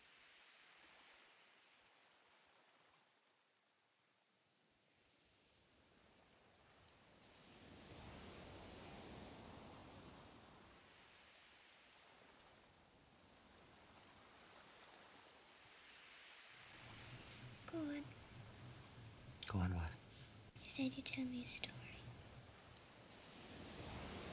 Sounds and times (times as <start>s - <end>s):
Speech: 17.7s - 18.1s, 19.4s - 20.0s, 20.6s - 22.0s.